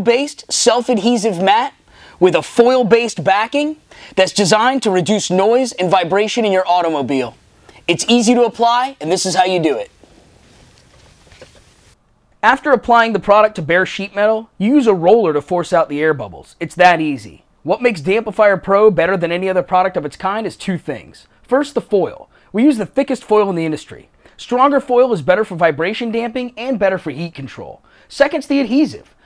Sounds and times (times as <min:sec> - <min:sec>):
Speech: 0:00.0 - 0:09.9, 0:12.4 - 0:29.2.